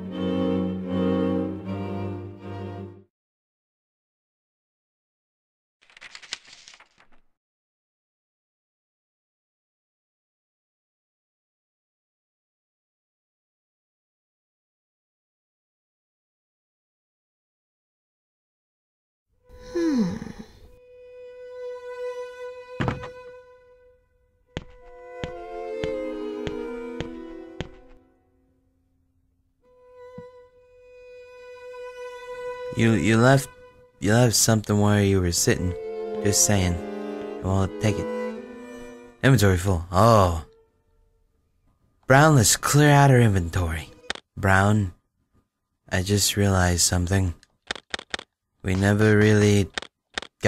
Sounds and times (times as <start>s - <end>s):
Cello: 0.0s - 3.1s, 19.5s - 23.9s, 24.6s - 28.0s, 29.7s - 40.8s
Speech: 32.7s - 36.8s, 37.4s - 38.1s, 39.2s - 40.5s, 42.1s - 45.0s, 45.9s - 47.4s, 48.7s - 49.8s.